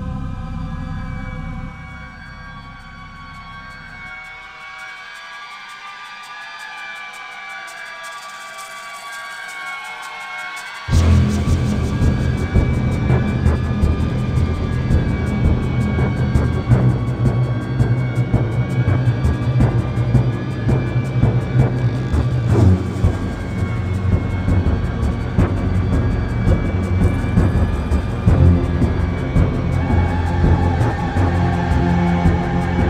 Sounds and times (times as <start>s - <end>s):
Music: 0.0s - 32.8s.